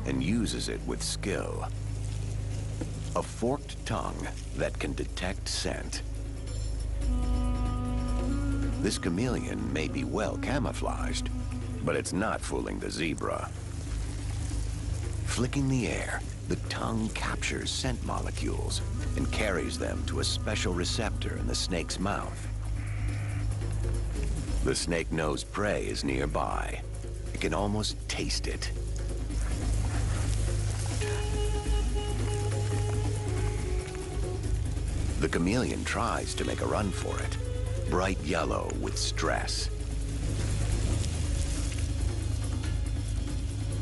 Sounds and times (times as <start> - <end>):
Speech: 0.0 - 1.7, 3.2 - 6.0, 8.8 - 13.5, 15.3 - 22.5, 24.6 - 26.8, 27.4 - 28.8, 35.2 - 39.7
Music: 0.0 - 43.8
Outside, rural or natural: 0.0 - 43.8.